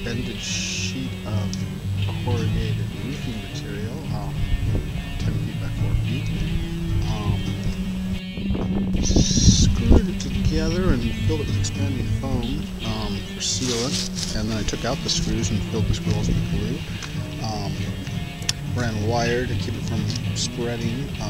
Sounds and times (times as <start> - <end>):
Speech: 0.0 - 4.5, 5.2 - 7.7, 9.0 - 16.8, 17.4 - 21.2
Music: 0.0 - 21.2.